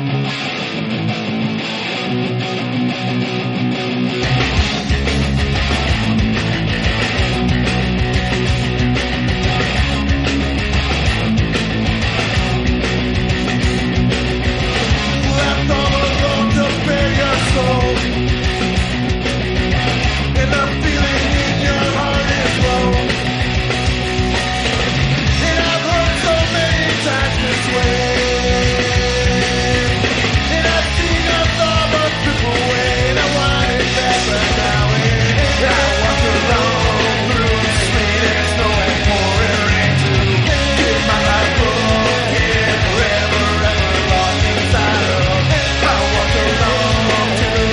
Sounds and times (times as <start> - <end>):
Music: 0.0 - 47.7.